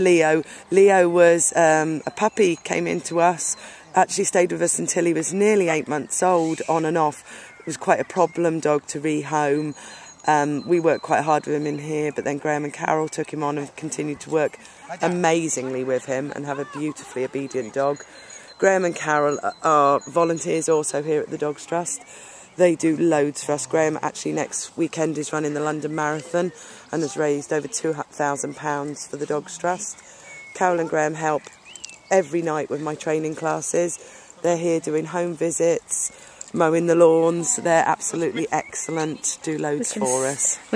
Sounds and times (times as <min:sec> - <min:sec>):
Speech: 0:00.0 - 0:18.0, 0:18.6 - 0:30.0, 0:30.6 - 0:31.4, 0:32.1 - 0:40.7.